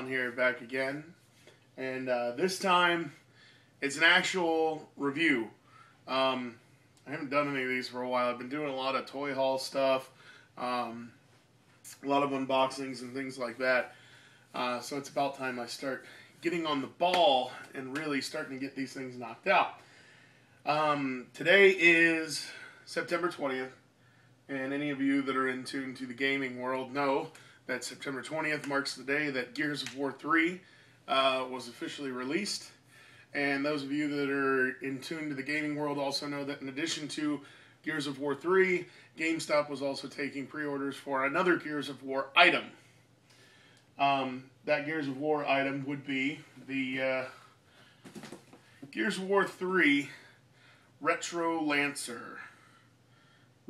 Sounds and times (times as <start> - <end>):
Speech: 0.0 - 1.2, 1.8 - 3.2, 3.8 - 11.2, 11.9 - 13.9, 14.5 - 19.8, 20.6 - 23.8, 24.5 - 42.8, 44.0 - 47.4, 48.9 - 50.3, 51.0 - 52.6.